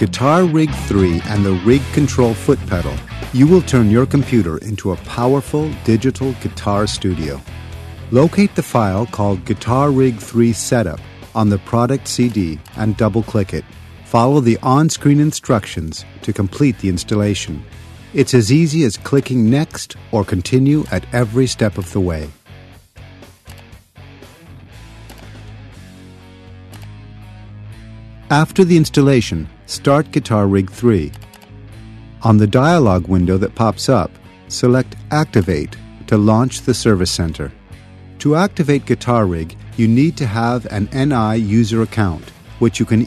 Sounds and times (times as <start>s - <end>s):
Speech: 0.0s - 7.4s, 8.1s - 22.4s, 28.3s - 31.2s, 32.2s - 37.6s, 38.2s - 43.0s
Music: 0.0s - 43.0s.